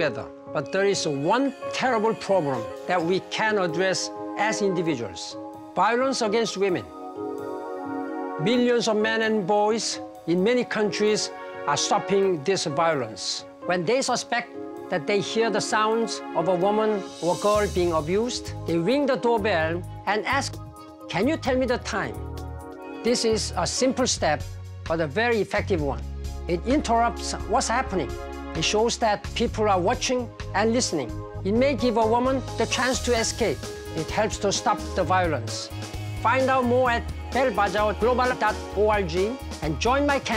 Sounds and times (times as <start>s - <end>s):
Speech: 0.0s - 6.9s, 8.4s - 22.2s, 23.0s - 40.3s
Music: 0.0s - 40.3s.